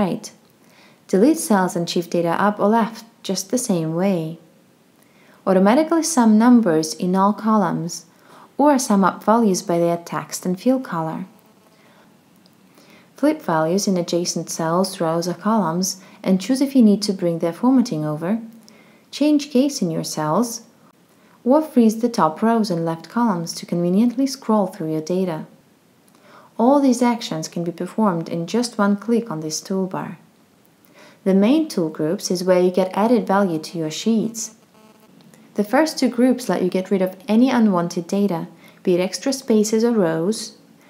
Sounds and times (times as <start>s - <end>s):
Speech: 0.0s - 0.4s, 1.1s - 4.4s, 5.5s - 11.4s, 13.2s - 18.5s, 19.1s - 20.7s, 21.5s - 25.5s, 26.6s - 30.2s, 31.2s - 34.6s, 35.6s - 40.6s.